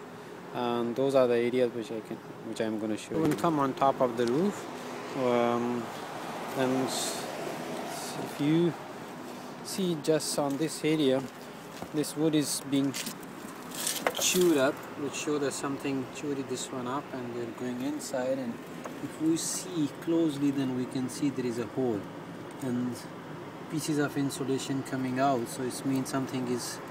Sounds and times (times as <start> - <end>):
Speech: 0.6 - 5.9, 6.6 - 7.3, 7.9 - 8.8, 9.7 - 11.3, 11.9 - 13.1, 14.2 - 23.1, 23.7 - 26.9.